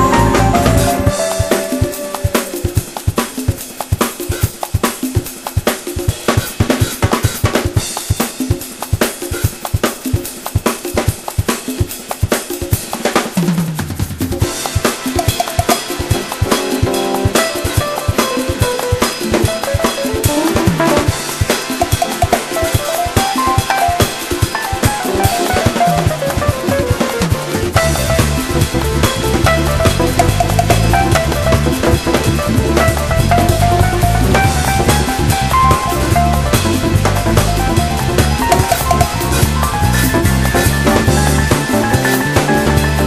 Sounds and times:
Cymbal: 0.0s - 43.0s
Snare drum: 0.0s - 43.0s.

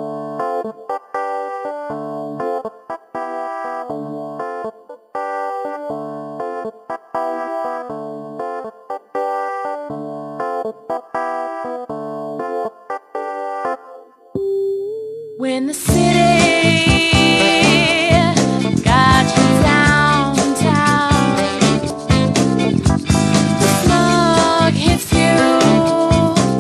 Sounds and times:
Funk: 15.9s - 26.6s.

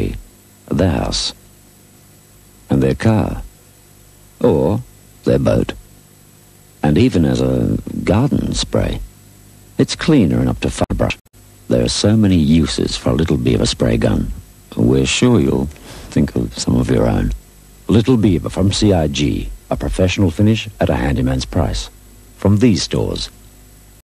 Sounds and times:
Speech: 0.0s - 1.4s, 2.7s - 3.5s, 4.4s - 5.8s, 6.8s - 9.1s, 9.8s - 23.4s.

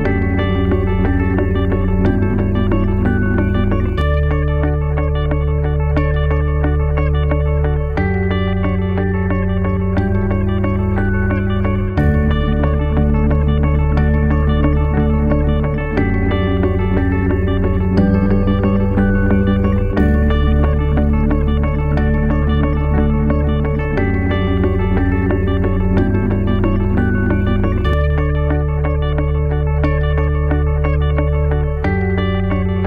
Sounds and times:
Techno: 0.0s - 32.8s.

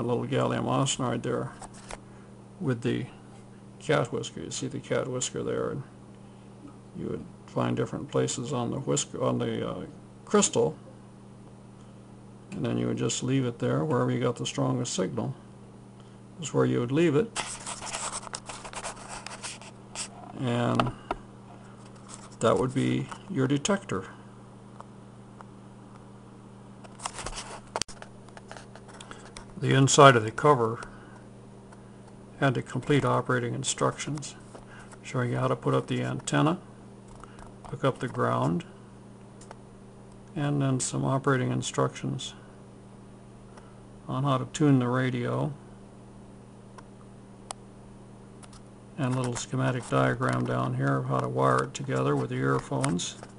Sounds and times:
Speech: 0.0s - 1.6s, 2.6s - 3.2s, 3.8s - 6.0s, 7.0s - 10.8s, 12.5s - 15.5s, 16.4s - 17.4s, 20.3s - 21.0s, 22.4s - 24.2s, 29.6s - 30.9s, 32.4s - 34.4s, 35.0s - 36.7s, 37.6s - 38.7s, 40.3s - 42.4s, 44.1s - 45.6s, 49.0s - 53.3s.

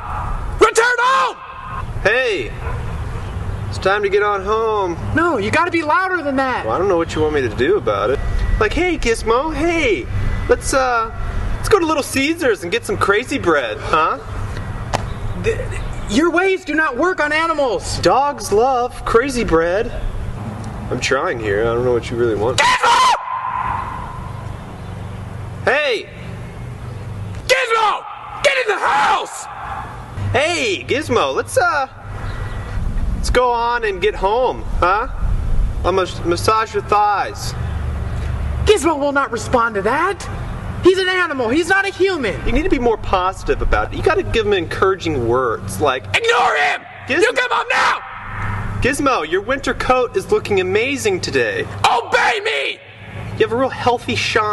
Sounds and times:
Speech: 3.7s - 14.3s, 15.4s - 20.0s, 20.9s - 22.6s, 25.6s - 26.2s, 30.3s - 32.0s, 33.2s - 35.2s, 35.9s - 37.6s, 38.7s - 40.3s, 40.9s - 48.0s, 48.8s - 52.8s, 53.4s - 54.5s.

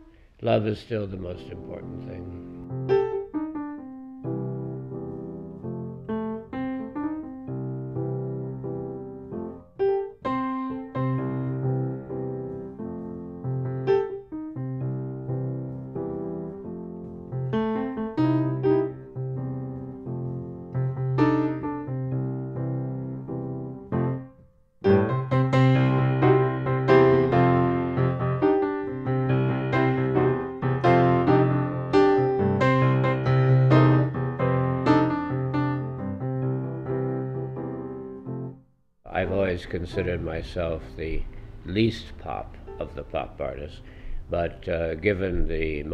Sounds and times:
Electric piano: 1.2s - 45.9s.

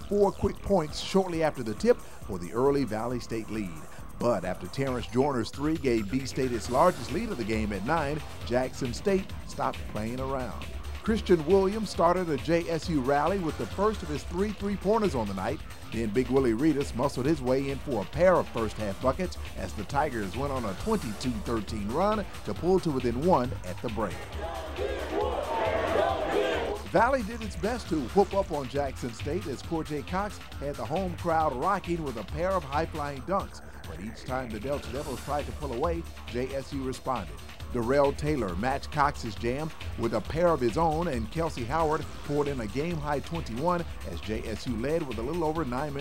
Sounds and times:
Speech: 0.0s - 24.3s, 26.9s - 46.0s
Music: 0.0s - 46.0s.

